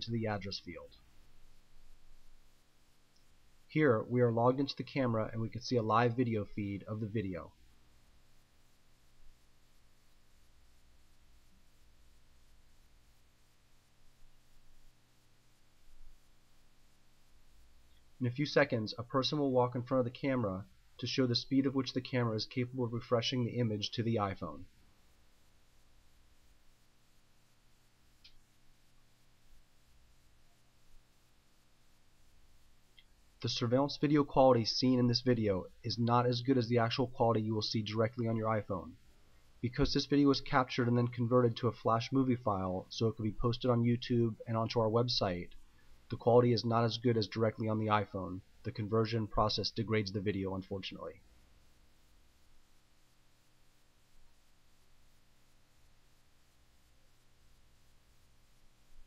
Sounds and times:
Speech: 0.0 - 1.0, 3.7 - 7.6, 18.2 - 24.7, 33.4 - 39.0, 39.6 - 51.2.

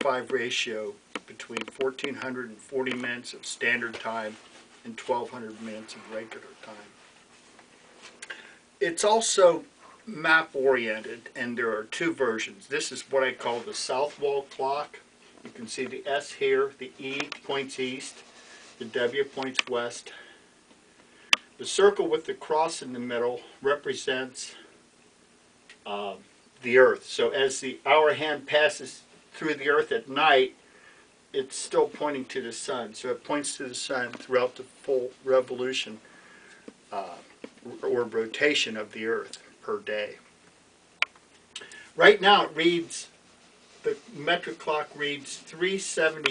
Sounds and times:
Speech: 0.0 - 7.0, 8.8 - 18.2, 18.8 - 20.2, 21.6 - 24.7, 25.8 - 30.6, 31.3 - 36.0, 36.9 - 40.2, 42.0 - 43.2, 43.8 - 46.3.

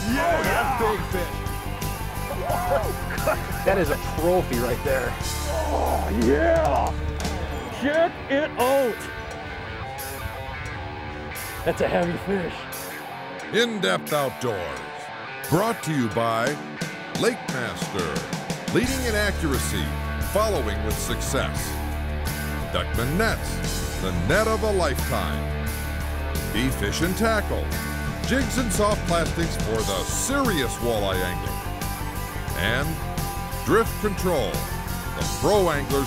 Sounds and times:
Speech: 0.0 - 1.3, 3.7 - 6.9, 11.7 - 12.6, 13.5 - 16.6, 17.2 - 21.6, 22.8 - 25.4, 26.5 - 31.5, 32.6 - 33.0, 33.7 - 34.6, 35.2 - 36.0
Music: 0.0 - 36.0.

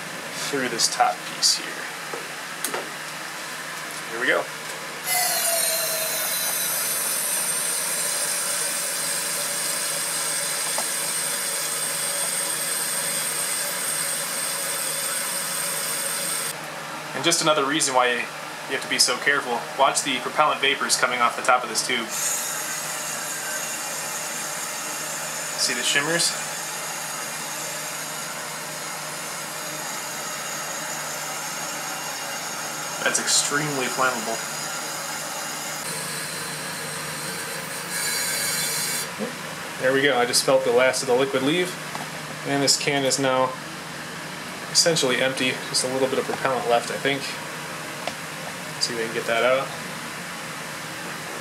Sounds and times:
Steam: 5.1 - 16.5, 22.1 - 23.6.

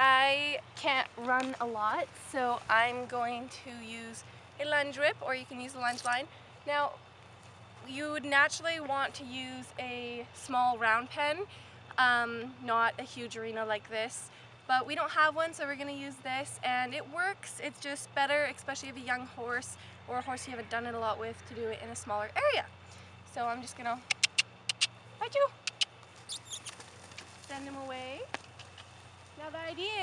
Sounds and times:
Speech: 0.0 - 7.0, 7.9 - 22.7, 23.3 - 24.0, 27.5 - 28.3, 29.4 - 30.0.

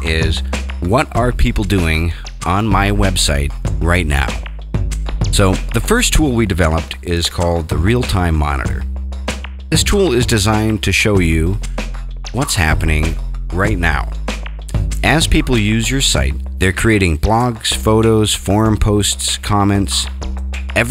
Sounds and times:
Speech: 0.0 - 4.4, 5.3 - 8.8, 9.7 - 11.6, 12.4 - 14.1, 15.0 - 20.1
Music: 0.0 - 20.9.

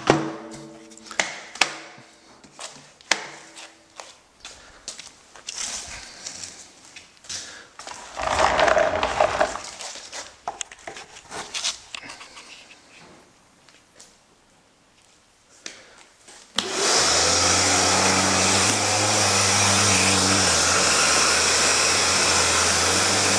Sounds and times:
Power tool: 7.8 - 9.6, 16.6 - 23.3.

